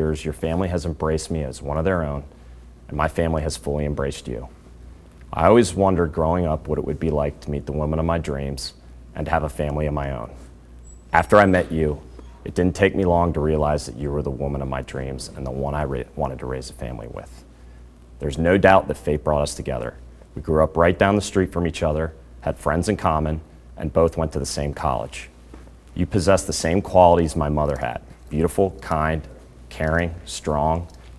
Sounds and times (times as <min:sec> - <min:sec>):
Speech: 0:00.0 - 0:02.3, 0:02.9 - 0:04.6, 0:05.3 - 0:10.5, 0:11.1 - 0:17.5, 0:18.2 - 0:25.4, 0:26.0 - 0:31.0.